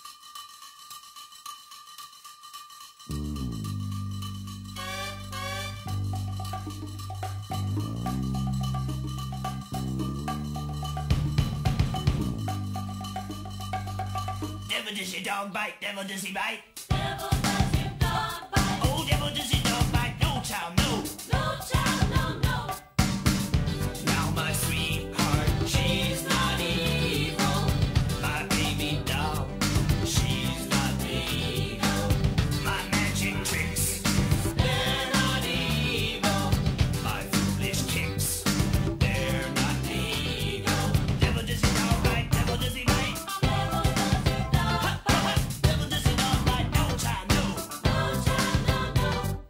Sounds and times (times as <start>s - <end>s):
Music: 0.0s - 15.0s, 16.7s - 49.5s.